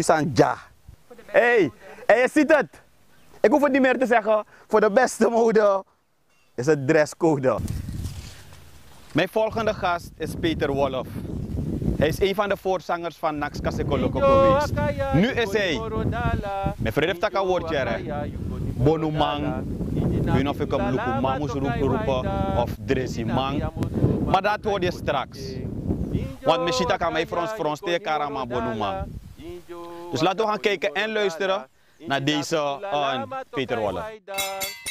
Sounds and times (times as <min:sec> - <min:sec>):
Speech: 0:00.0 - 0:02.8, 0:03.4 - 0:05.8, 0:06.6 - 0:07.6, 0:09.2 - 0:11.2, 0:12.0 - 0:15.9, 0:16.9 - 0:23.7, 0:24.3 - 0:29.1, 0:30.1 - 0:34.5.